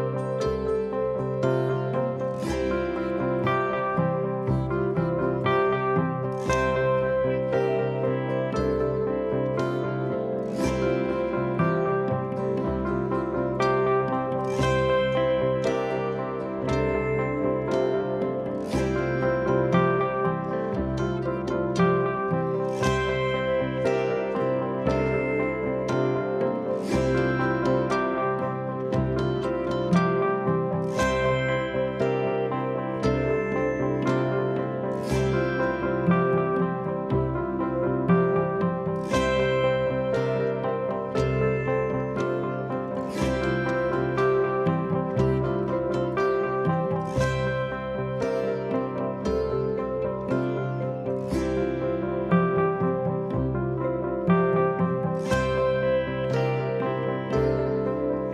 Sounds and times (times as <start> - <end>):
Classical music: 0.0 - 58.3.